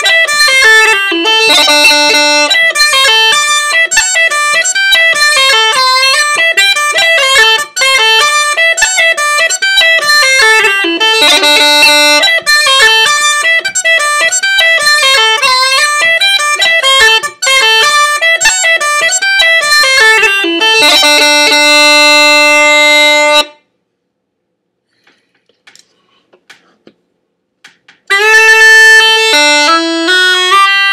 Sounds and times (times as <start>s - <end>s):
Wind instrument, woodwind instrument: 0.0s - 23.7s, 28.1s - 30.9s.